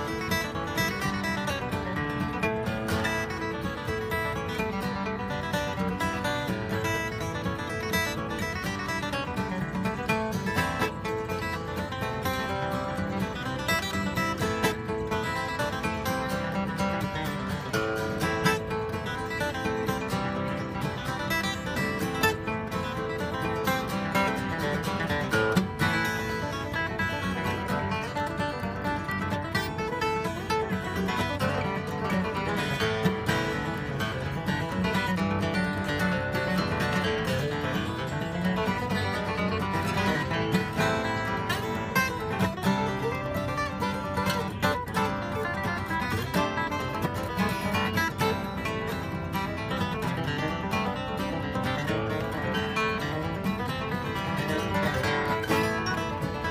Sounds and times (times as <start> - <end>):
Music: 0.0 - 56.5.